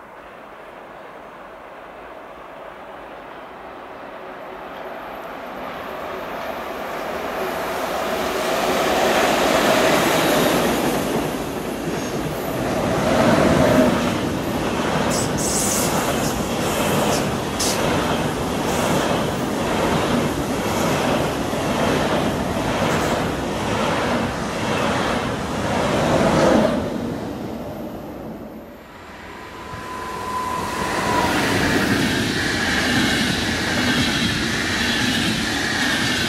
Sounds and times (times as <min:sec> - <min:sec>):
Railroad car, train wagon: 0:00.0 - 0:36.2
Train: 0:00.0 - 0:36.2.